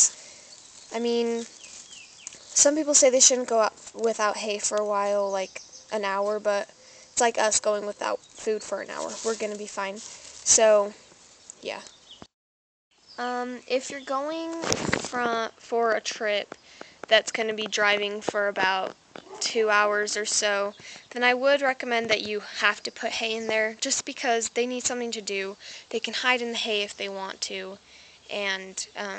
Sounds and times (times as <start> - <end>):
Speech: 1.0 - 1.5, 2.6 - 11.0, 11.6 - 11.9, 13.2 - 16.4, 17.1 - 29.1.